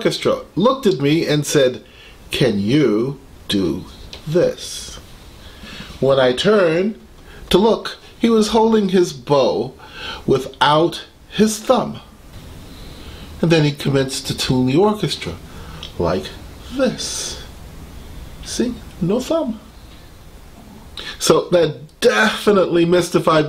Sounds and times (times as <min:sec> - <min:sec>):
Speech: 0:00.0 - 0:05.0, 0:06.0 - 0:12.1, 0:13.4 - 0:17.5, 0:18.4 - 0:19.7, 0:21.0 - 0:23.4.